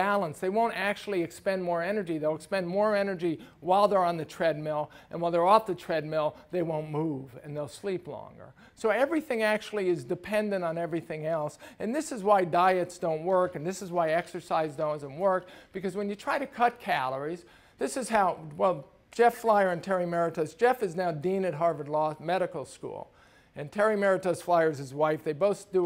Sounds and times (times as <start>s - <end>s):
Speech: 0.0s - 25.8s.